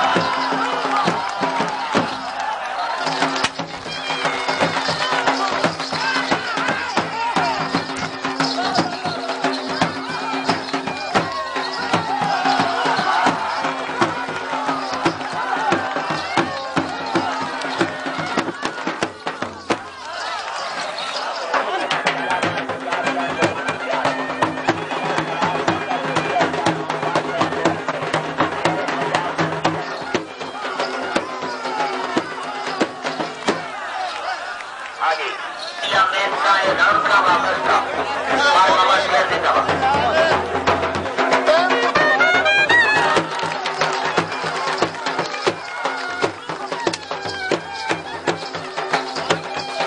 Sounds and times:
Music: 0.0s - 34.9s, 35.6s - 49.8s
Speech: 2.7s - 49.8s.

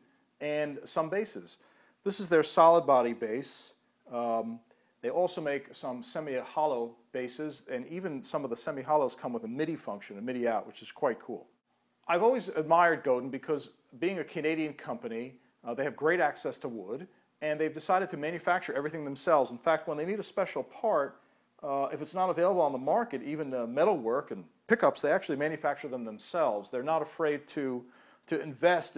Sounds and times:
Speech: 0.4s - 28.9s.

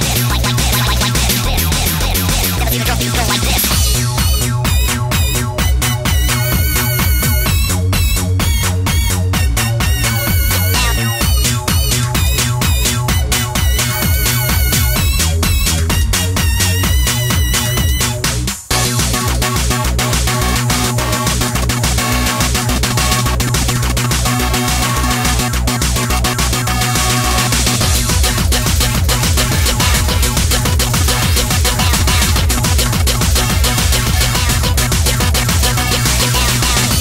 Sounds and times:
Sampler: 0.0s - 8.2s, 9.9s - 15.7s, 26.7s - 37.0s.

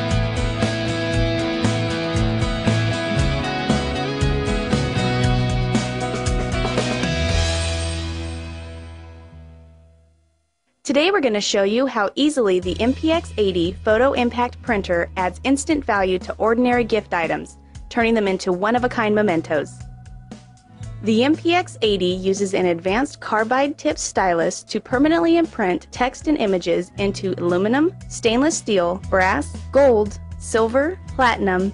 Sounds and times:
Music: 0.0s - 31.7s
Speech: 10.9s - 19.8s, 21.0s - 31.7s.

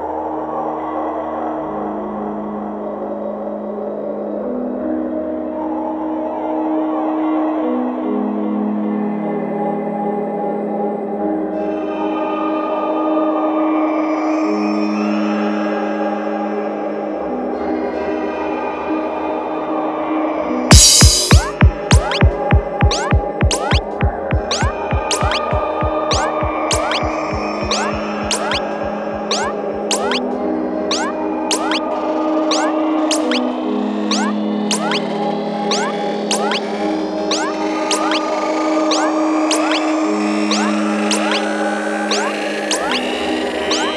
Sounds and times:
Music: 0.0s - 43.9s.

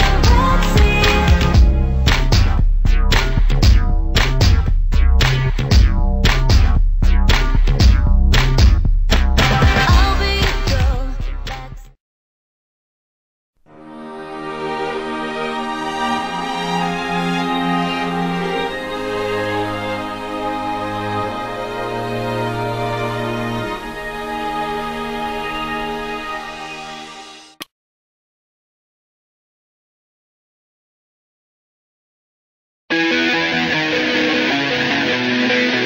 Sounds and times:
Theme music: 0.0s - 6.6s, 13.7s - 27.6s.

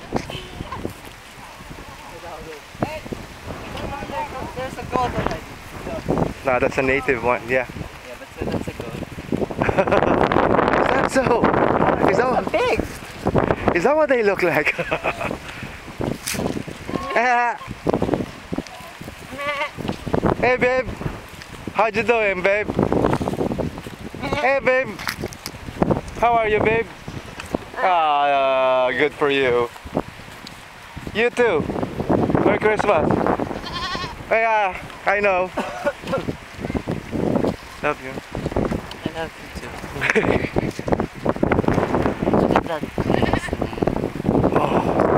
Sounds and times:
Bleat: 19.3s - 19.9s, 24.2s - 24.5s, 33.6s - 34.2s, 43.0s - 43.8s.

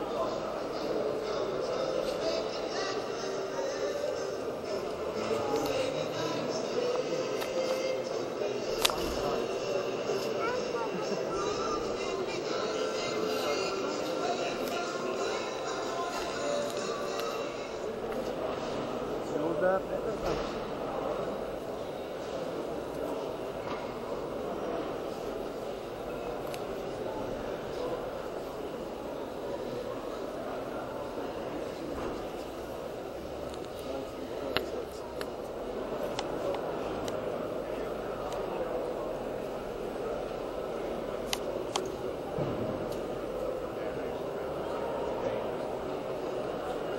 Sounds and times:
Speech: 0.0s - 46.9s
Music: 1.6s - 17.9s.

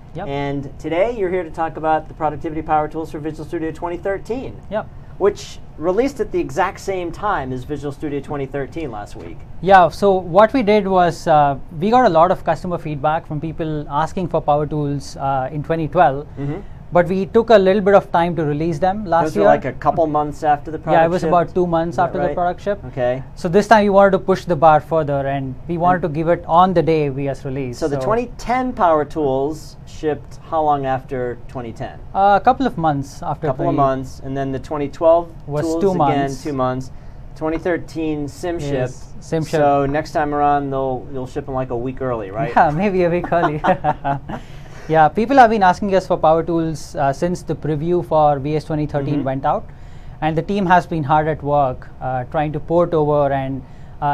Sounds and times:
Speech: 0.2s - 43.9s, 44.9s - 54.1s.

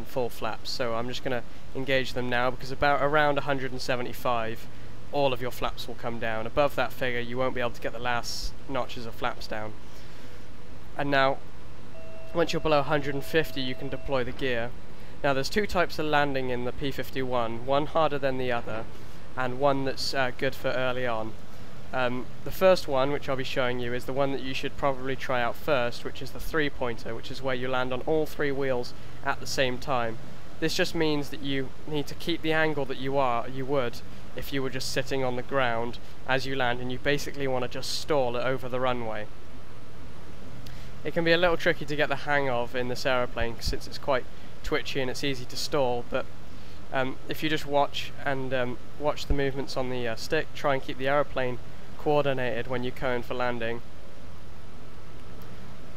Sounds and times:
Speech: 0.0s - 9.8s, 11.0s - 11.4s, 12.3s - 39.3s, 41.0s - 46.3s, 46.9s - 53.8s.

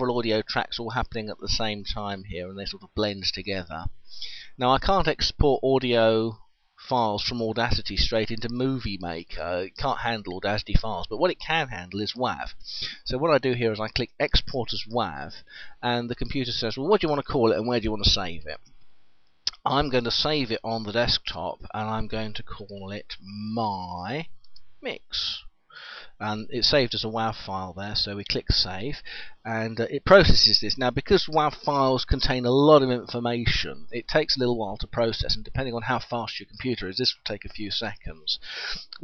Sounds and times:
Speech: 0.0s - 18.6s, 19.5s - 25.5s, 26.2s - 39.0s.

